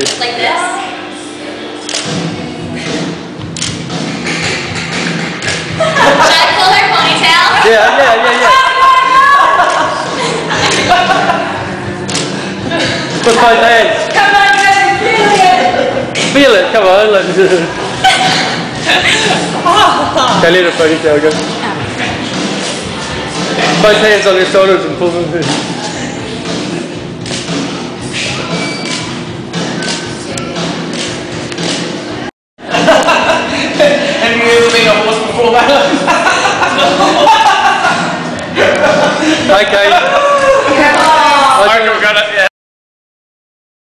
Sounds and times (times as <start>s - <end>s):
Music: 0.0s - 41.8s
Inside, large room or hall: 0.0s - 42.5s.